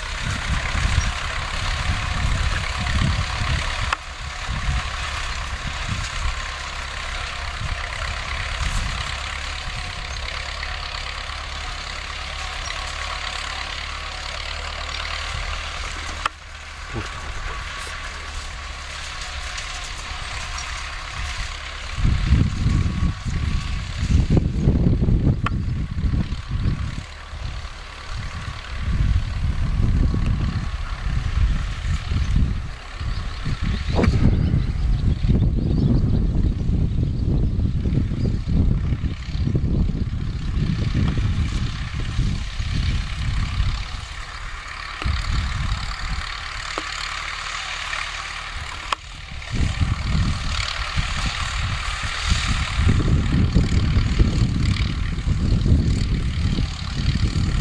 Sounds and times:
Idling: 0.0s - 57.6s
Vehicle: 0.0s - 57.6s.

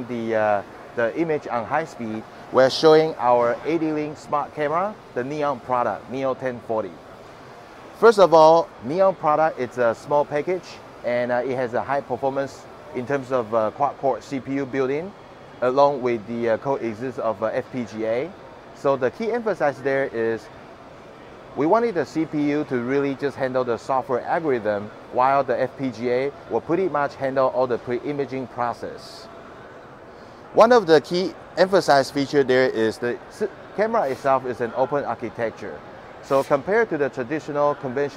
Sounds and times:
Speech: 0.0s - 7.0s, 8.0s - 20.5s, 21.6s - 29.3s, 30.6s - 38.1s.

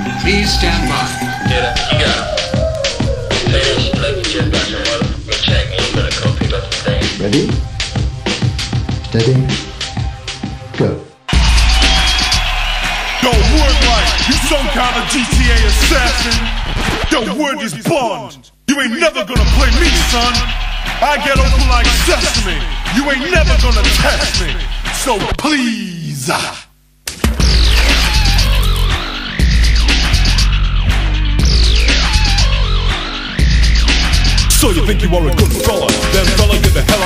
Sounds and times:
Music: 0.0s - 18.1s, 19.3s - 25.4s, 27.1s - 37.0s.

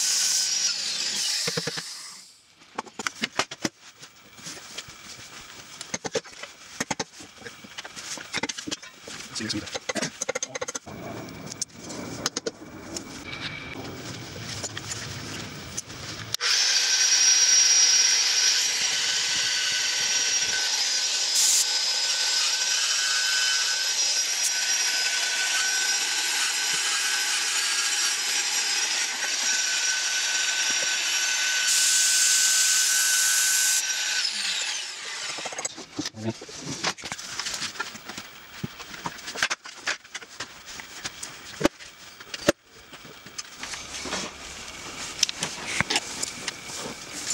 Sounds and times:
Tools: 5.8s - 10.9s, 35.2s - 36.2s.

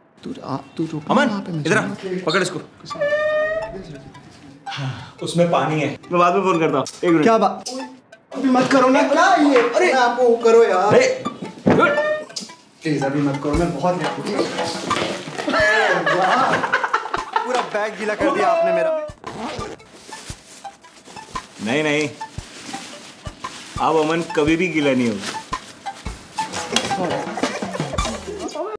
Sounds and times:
Music: 0.2s - 28.7s.

